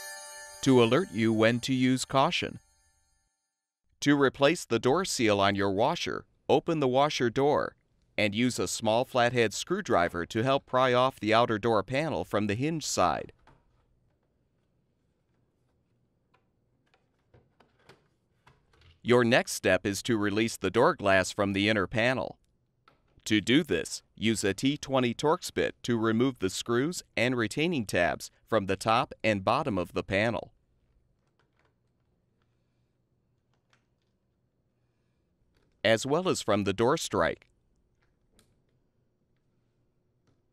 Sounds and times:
Speech: 0.6s - 2.6s, 4.0s - 13.3s, 19.1s - 22.4s, 23.3s - 30.5s, 35.9s - 37.4s.

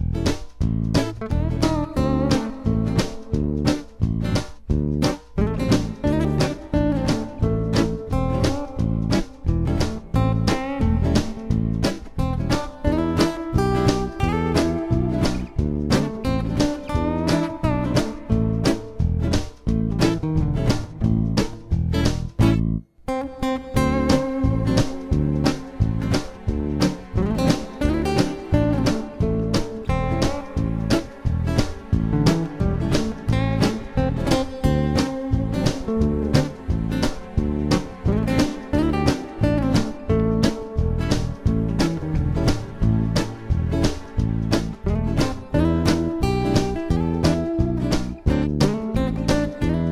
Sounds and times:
Blues: 0.0s - 49.9s
Independent music: 0.0s - 49.9s
Tender music: 23.8s - 49.9s.

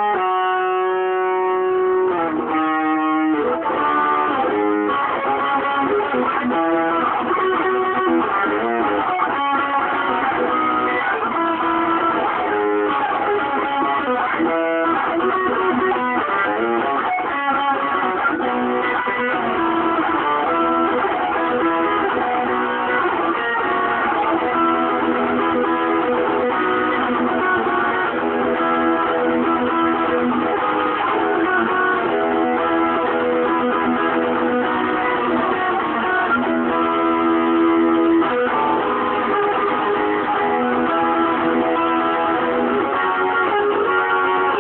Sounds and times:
Electric guitar: 0.0s - 44.6s
Strum: 0.0s - 44.6s.

